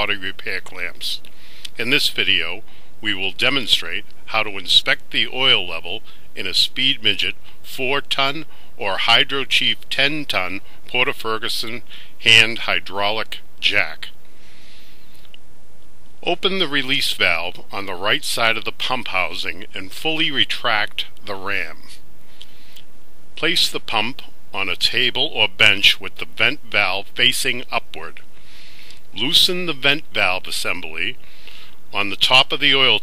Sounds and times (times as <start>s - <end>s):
Speech: 0.0s - 14.2s, 16.2s - 22.0s, 23.4s - 28.2s, 29.1s - 31.2s, 31.9s - 33.0s.